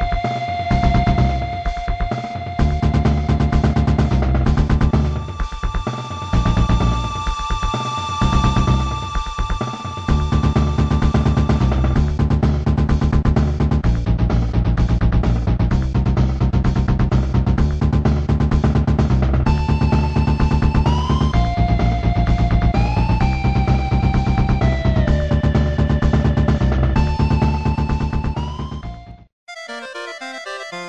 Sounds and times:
Music: 0.0s - 30.8s.

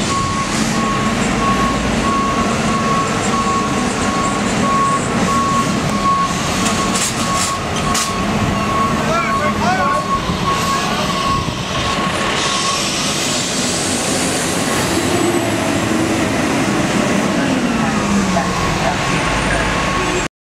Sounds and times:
Truck: 0.0s - 20.3s.

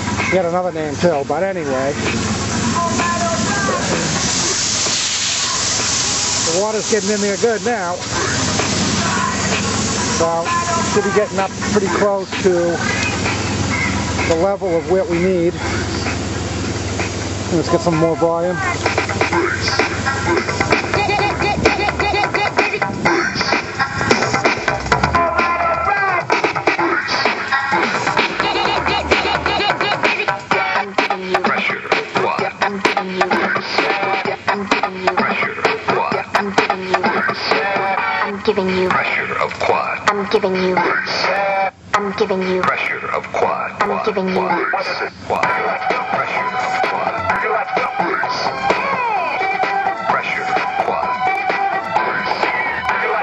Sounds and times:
Music: 0.0s - 53.2s
Speech: 0.3s - 2.0s, 6.5s - 8.0s, 10.2s - 12.8s, 14.3s - 16.1s, 17.5s - 18.8s.

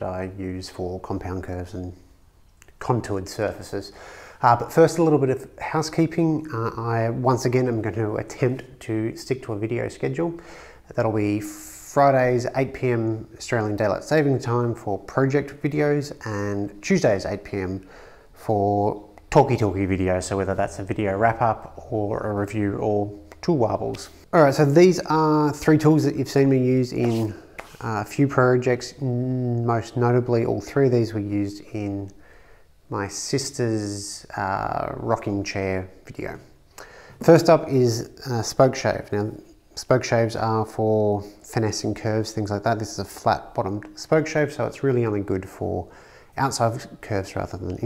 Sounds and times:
Speech: 0.0s - 32.2s, 32.9s - 36.6s, 37.2s - 47.8s.

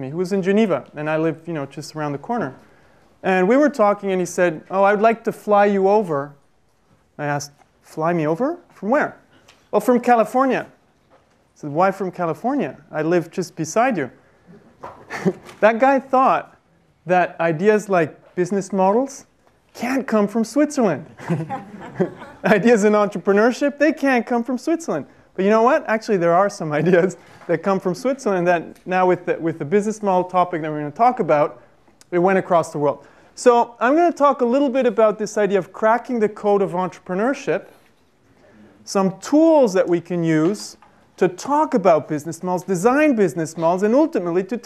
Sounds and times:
Speech: 0.0s - 2.6s, 3.2s - 6.4s, 7.2s - 10.8s, 11.6s - 14.2s, 15.6s - 21.1s, 22.4s - 37.8s, 38.5s - 44.6s.

